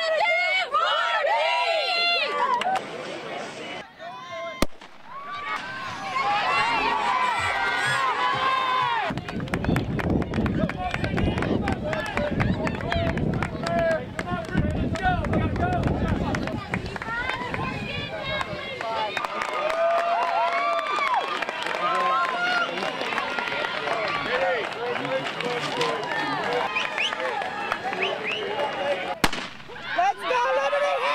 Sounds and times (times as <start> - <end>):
Run: 5.1 - 31.1.